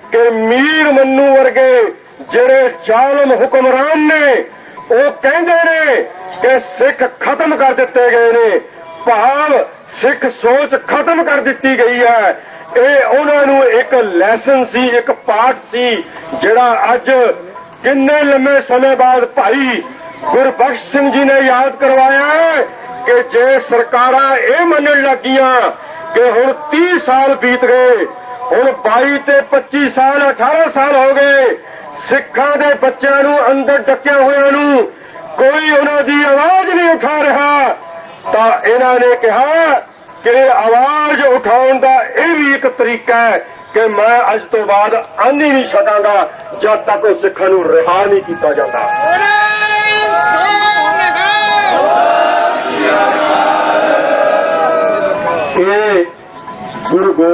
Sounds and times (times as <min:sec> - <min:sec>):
Male speech, man speaking: 0:00.0 - 0:51.9, 0:55.5 - 0:56.2, 0:56.9 - 0:57.3.